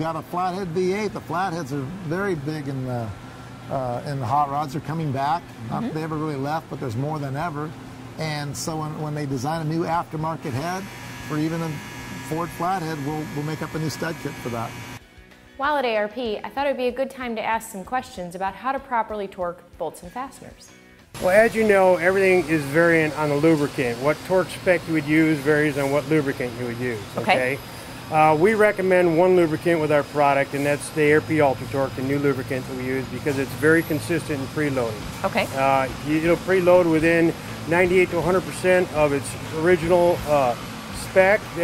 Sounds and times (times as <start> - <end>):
Music: 12.8 - 41.6
Speech: 21.2 - 27.6, 28.2 - 41.6.